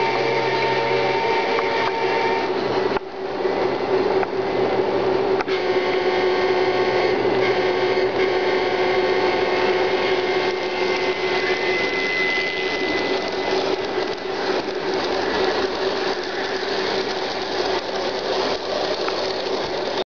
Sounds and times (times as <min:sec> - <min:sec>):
Railroad car, train wagon: 0:00.0 - 0:20.0
Train: 0:00.0 - 0:20.0.